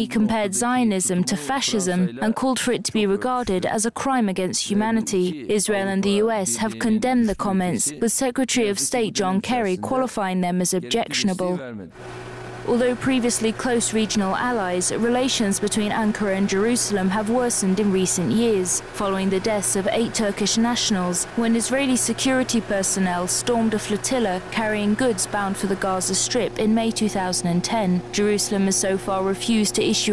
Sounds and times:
Male speech, man speaking: 0.0s - 3.8s, 4.8s - 10.1s, 10.7s - 12.0s
Female speech, woman speaking: 0.0s - 11.7s, 12.7s - 30.1s
Narration, monologue: 0.0s - 30.1s.

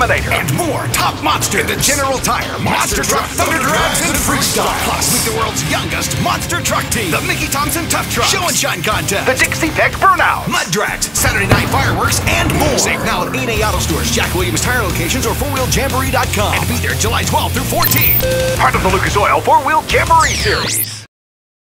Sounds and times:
Speech: 0.0s - 21.0s
Music: 0.0s - 21.1s.

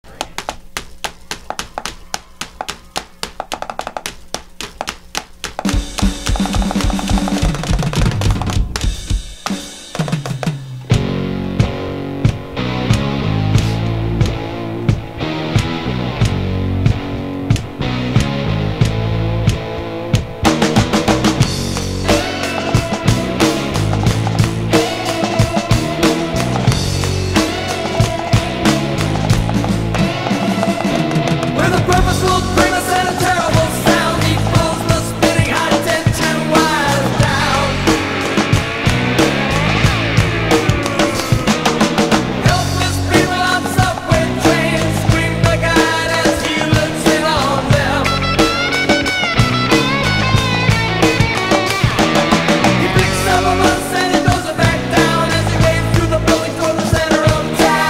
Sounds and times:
Drum kit: 0.0s - 57.8s
Drum: 0.1s - 57.8s.

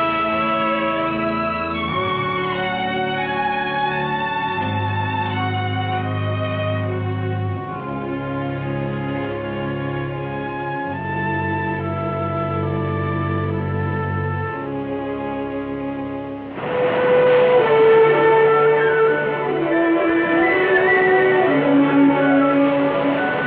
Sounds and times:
Music: 0.0s - 23.4s.

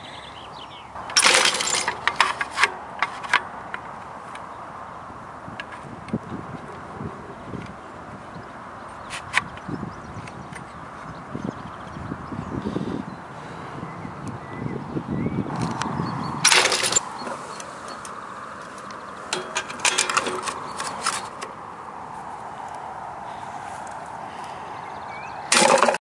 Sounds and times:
Bird: 0.0s - 1.2s, 23.2s - 26.0s.

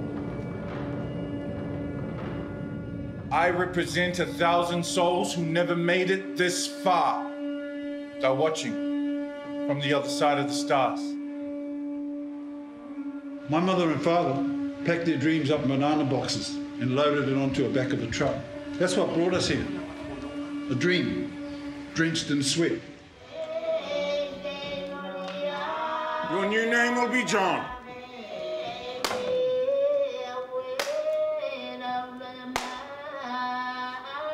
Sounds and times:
Music: 0.0s - 34.3s
Speech: 3.4s - 7.3s, 9.7s - 11.1s, 13.5s - 19.8s, 26.3s - 27.8s.

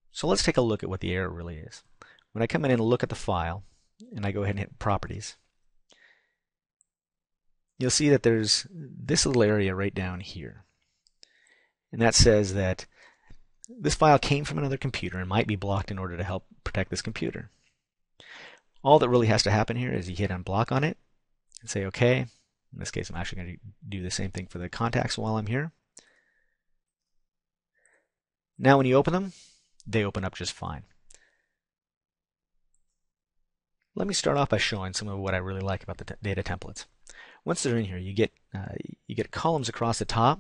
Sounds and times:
Inside, small room: 0.0s - 40.4s
Speech: 0.1s - 5.4s, 7.8s - 10.7s, 11.9s - 12.9s, 13.6s - 17.6s, 18.8s - 21.0s, 21.6s - 25.8s, 28.6s - 31.0s, 34.0s - 40.4s.

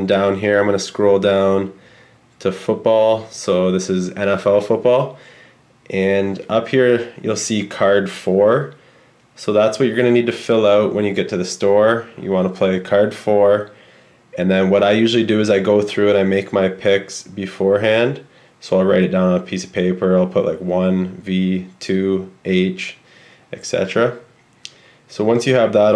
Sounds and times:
Speech: 0.0s - 1.8s, 2.4s - 5.2s, 5.9s - 8.8s, 9.4s - 24.3s, 25.1s - 25.9s.

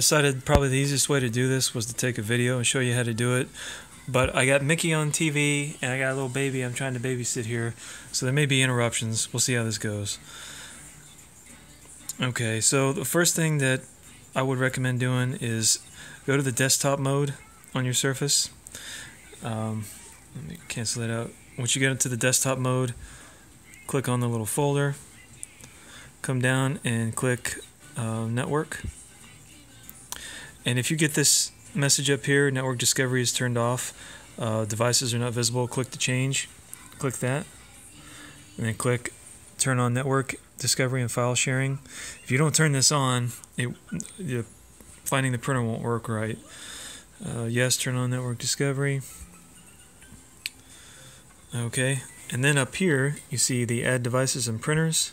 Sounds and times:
Speech: 0.0s - 3.5s, 4.1s - 10.2s, 12.1s - 18.6s, 19.3s - 23.0s, 23.7s - 25.0s, 26.2s - 28.9s, 30.6s - 37.6s, 38.5s - 46.5s, 47.2s - 49.1s, 51.5s - 55.1s
Music: 0.0s - 55.1s.

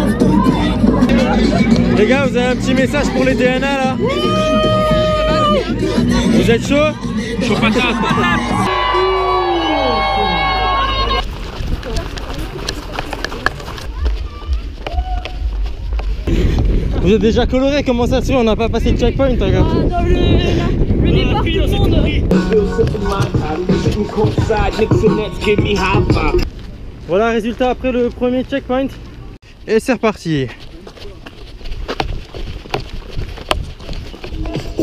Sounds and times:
Music: 0.0s - 8.7s, 22.0s - 26.4s
Run: 7.0s - 17.9s, 25.6s - 34.8s.

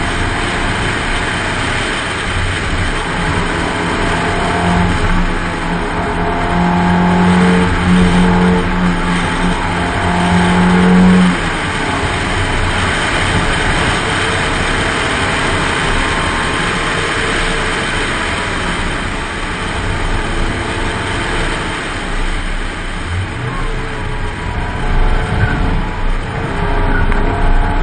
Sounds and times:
Accelerating, revving, vroom: 0.0s - 27.8s
Vehicle: 0.0s - 27.8s.

